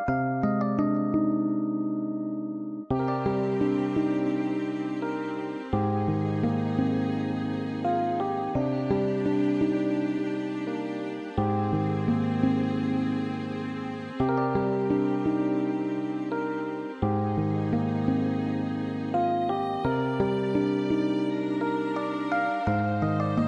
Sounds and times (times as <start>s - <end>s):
Sad music: 2.9s - 23.4s.